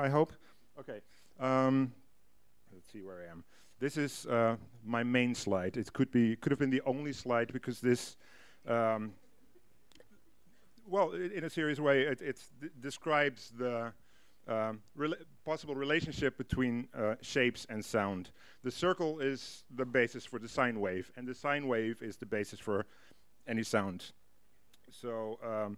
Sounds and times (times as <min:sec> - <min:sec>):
Speech: 0:00.0 - 0:02.0, 0:02.7 - 0:09.2, 0:10.8 - 0:22.9, 0:23.5 - 0:24.2, 0:24.9 - 0:25.7.